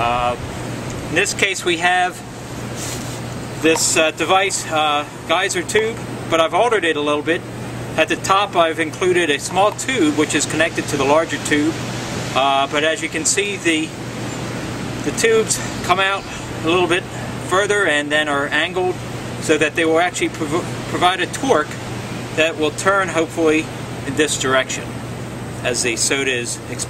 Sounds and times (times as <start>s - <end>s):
Speech: 0.0s - 0.4s, 1.1s - 2.3s, 3.6s - 7.4s, 8.0s - 11.8s, 12.4s - 14.0s, 15.1s - 21.8s, 22.4s - 24.9s, 25.6s - 26.8s.